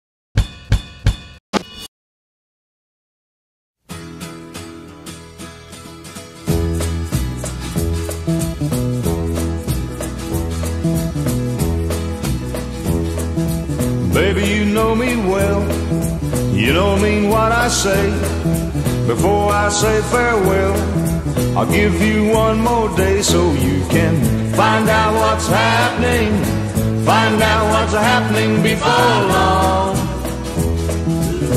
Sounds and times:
Drum kit: 0:00.4 - 0:01.9, 0:06.5 - 0:31.5.

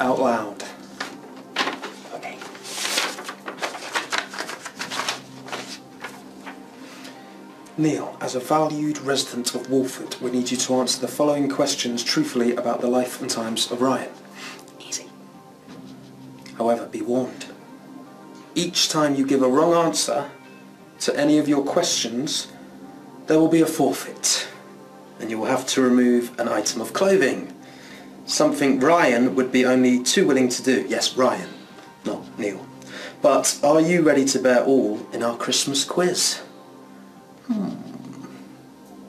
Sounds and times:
Speech: 0:00.0 - 0:00.8, 0:07.7 - 0:14.2, 0:16.5 - 0:17.6, 0:18.6 - 0:20.4, 0:21.0 - 0:22.6, 0:23.3 - 0:24.6, 0:25.2 - 0:27.6, 0:28.3 - 0:36.5
Inside, small room: 0:00.0 - 0:39.0
Music: 0:00.0 - 0:39.0.

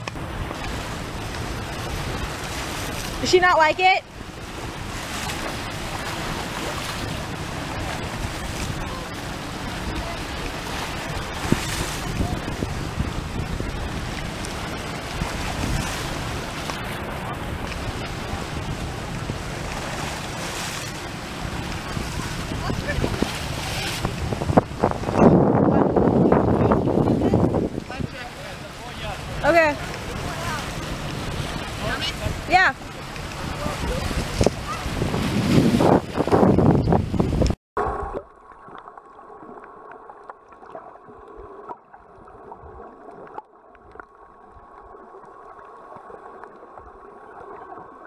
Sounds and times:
Stream: 0:00.0 - 0:48.0.

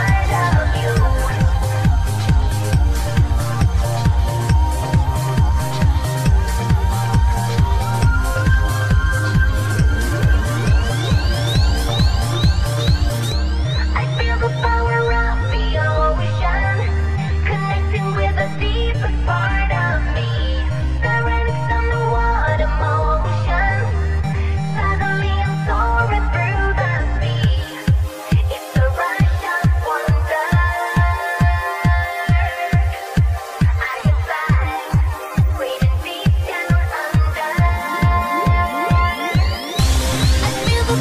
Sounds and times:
Techno: 0:00.0 - 0:41.0
Trance music: 0:00.0 - 0:41.0.

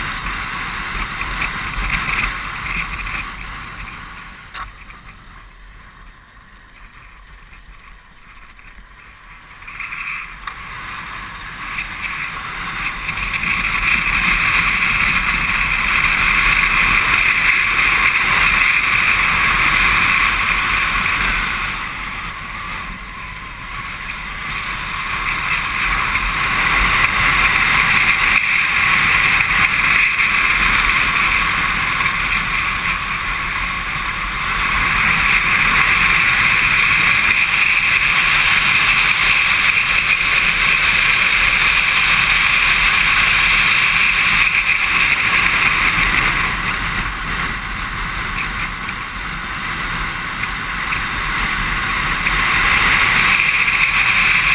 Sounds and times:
Vehicle: 0:00.0 - 0:54.5.

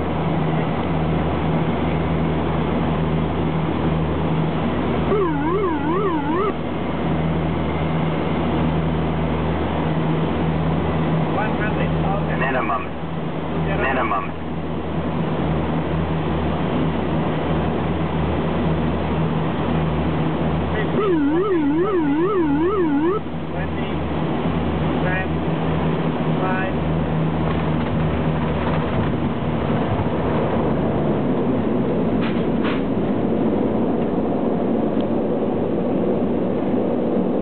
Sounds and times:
Speech: 0:11.4 - 0:12.9, 0:13.6 - 0:14.4, 0:23.6 - 0:24.0, 0:25.0 - 0:25.3, 0:26.4 - 0:26.8.

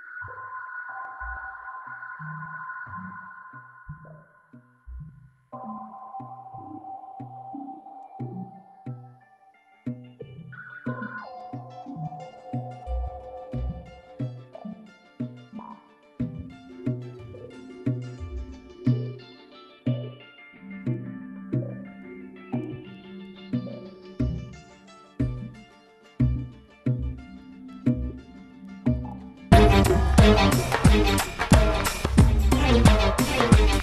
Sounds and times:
Sonar: 0:00.0 - 0:09.2, 0:10.5 - 0:14.8
Music: 0:00.0 - 0:33.8.

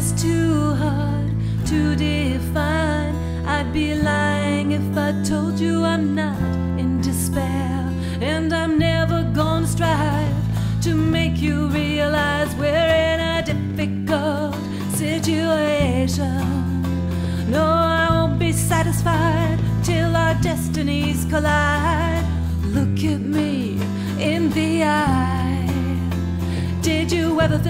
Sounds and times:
Music: 0:00.0 - 0:27.7.

